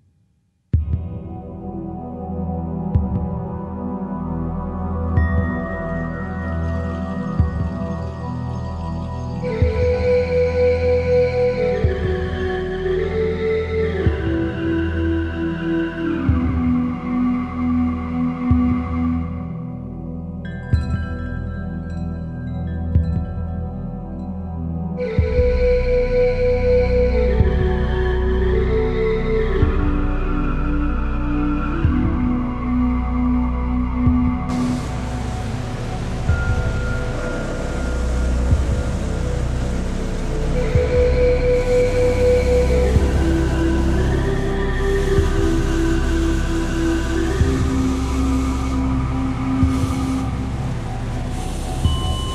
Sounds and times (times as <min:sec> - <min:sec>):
Ambient music: 0:00.8 - 0:52.3.